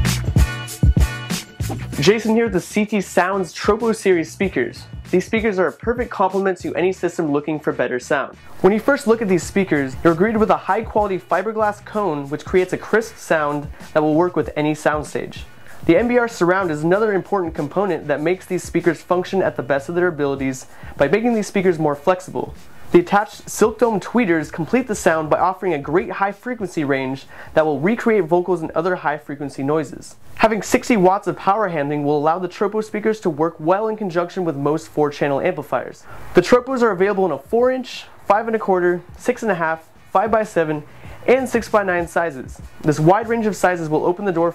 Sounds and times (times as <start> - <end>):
Speech: 2.0 - 44.5.